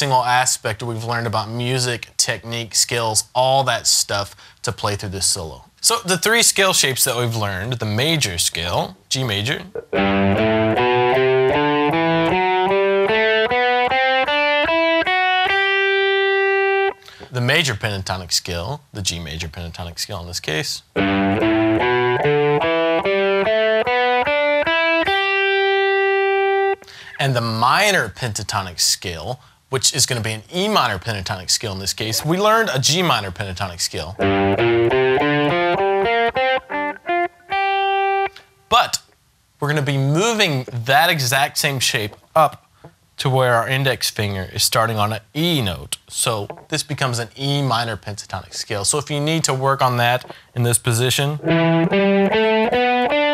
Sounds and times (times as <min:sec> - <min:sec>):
Speech: 0:00.0 - 0:09.8, 0:17.3 - 0:20.9, 0:27.2 - 0:34.2, 0:38.7 - 0:42.6, 0:43.2 - 0:51.4
Strum: 0:09.6 - 0:17.0, 0:21.0 - 0:26.8, 0:51.4 - 0:53.3
Electric guitar: 0:09.6 - 0:17.3, 0:21.0 - 0:27.2, 0:34.2 - 0:38.7, 0:51.4 - 0:53.3.